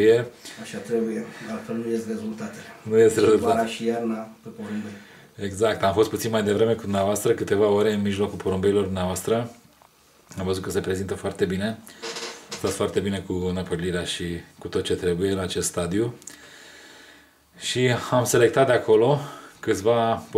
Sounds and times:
Speech: 0.0 - 9.6, 10.3 - 11.8, 12.6 - 16.2, 17.6 - 20.3.

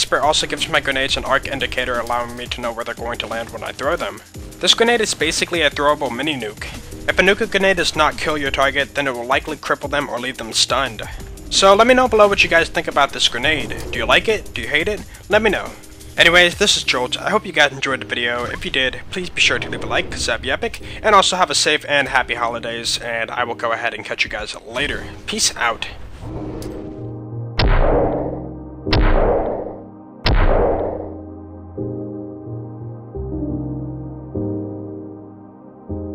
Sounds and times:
Speech: 0.0 - 26.0
Music: 0.0 - 36.1.

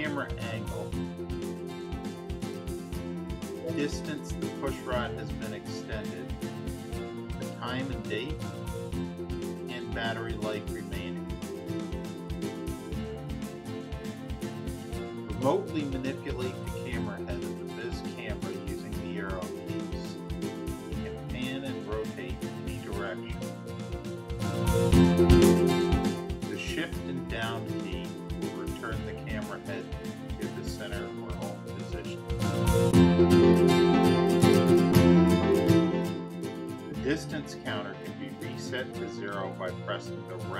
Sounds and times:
Speech: 0.0 - 1.0, 3.6 - 6.4, 7.4 - 8.4, 9.7 - 11.2, 15.3 - 20.2, 21.0 - 23.4, 26.5 - 32.2, 36.9 - 40.5
Music: 0.0 - 40.5.

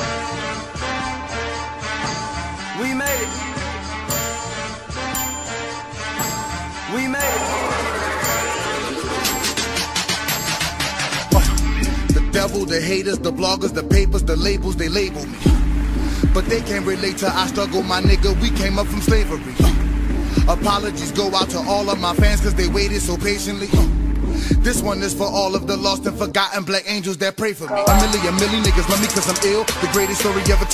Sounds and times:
Electronica: 3.0 - 11.8, 27.7 - 30.7.

